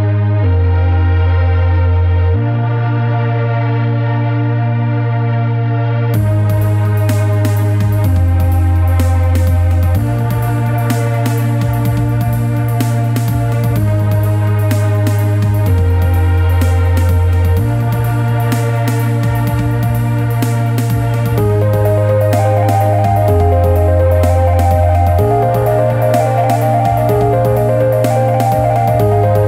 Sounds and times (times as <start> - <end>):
Dubstep: 6.2 - 29.4.